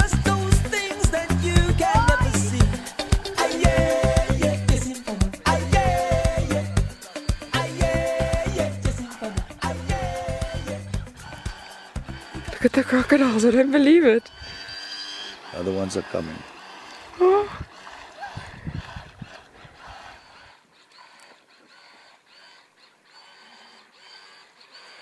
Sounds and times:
Motorboat, speedboat: 0.0 - 8.8, 9.6 - 25.0
Music: 0.0 - 13.6
Speech: 15.6 - 16.4.

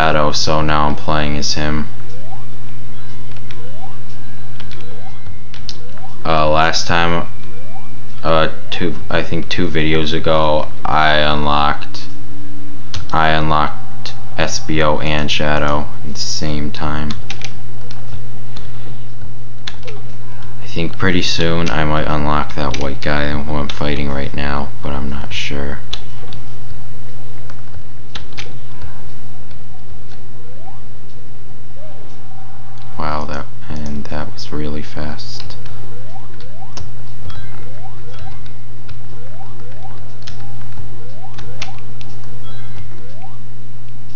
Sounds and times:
Speech: 0.0 - 1.9, 6.3 - 7.3, 8.2 - 12.1, 13.1 - 13.8, 14.4 - 17.2, 20.6 - 25.9, 33.0 - 35.6.

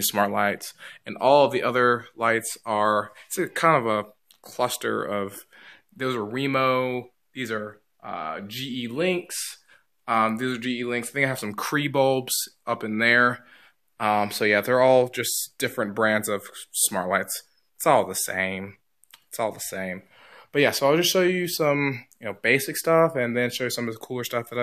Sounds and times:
Speech: 0.0 - 24.6.

